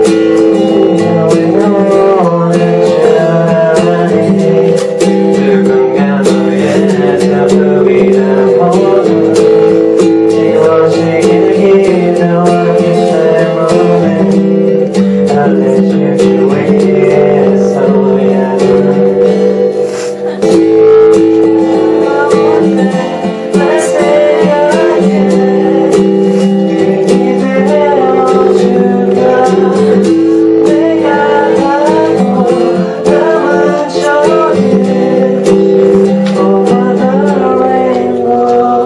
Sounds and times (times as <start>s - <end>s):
Male singing: 0.0s - 19.3s, 20.4s - 38.8s
Music: 0.0s - 38.8s.